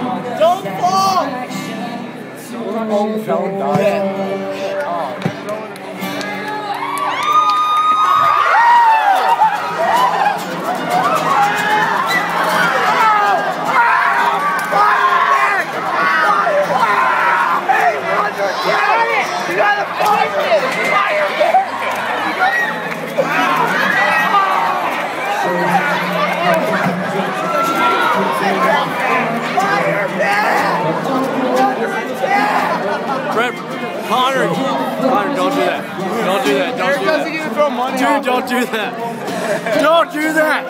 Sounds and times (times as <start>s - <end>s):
Music: 0.0s - 40.7s.